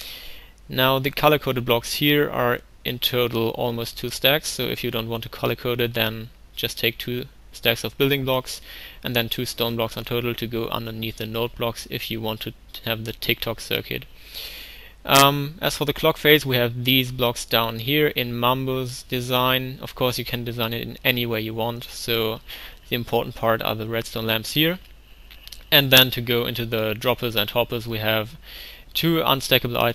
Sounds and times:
Speech: 0.7 - 14.1, 15.1 - 24.8, 25.6 - 28.4, 29.0 - 29.9.

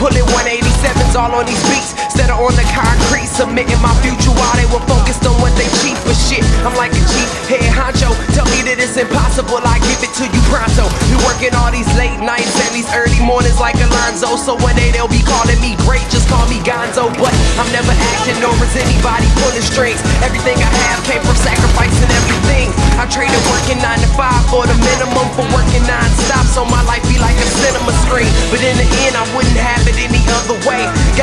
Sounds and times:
Soundtrack music: 0.0 - 31.2.

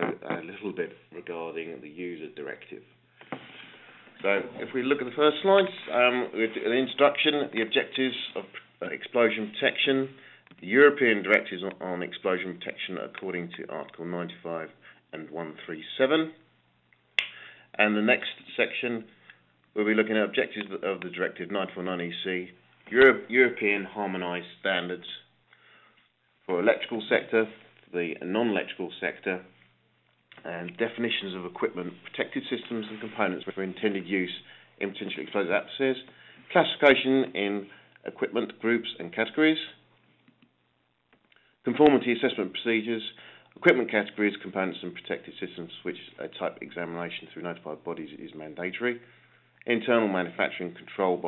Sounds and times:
Speech: 0.0 - 3.0, 4.2 - 16.5, 17.7 - 25.3, 26.5 - 29.6, 30.4 - 39.8, 41.6 - 49.0, 49.6 - 51.2.

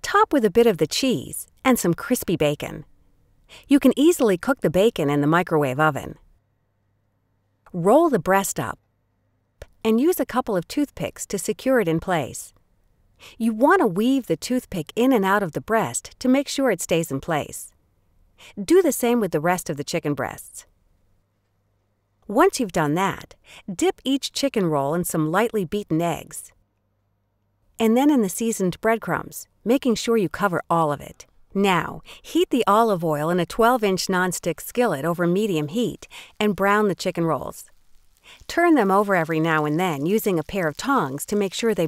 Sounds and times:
Speech: 0.0 - 2.8, 3.6 - 6.2, 7.7 - 8.8, 9.6 - 12.5, 13.3 - 17.7, 18.5 - 20.7, 22.3 - 26.5, 27.8 - 37.7, 38.5 - 41.8.

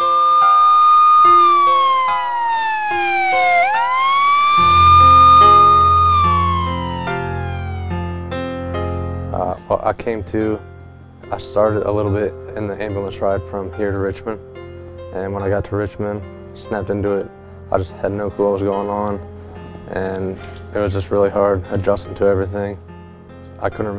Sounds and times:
Ambulance (siren): 0.0 - 8.3
Music: 0.0 - 23.9
Speech: 9.3 - 10.6, 11.3 - 14.4, 15.2 - 19.3, 19.9 - 22.8, 23.6 - 23.9.

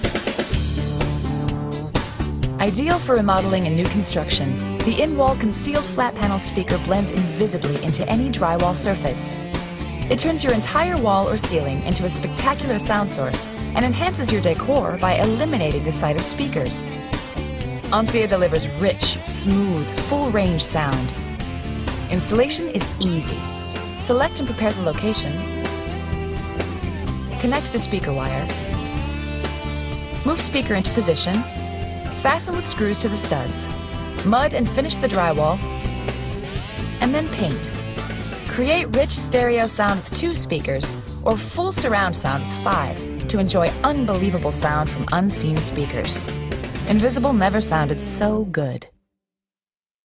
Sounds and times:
Music: 0.0 - 49.2
Speech: 2.6 - 9.4, 10.1 - 16.8, 17.9 - 21.2, 22.1 - 25.4, 27.4 - 28.5, 30.2 - 31.5, 32.2 - 35.6, 37.0 - 37.7, 38.5 - 46.2, 46.9 - 48.9.

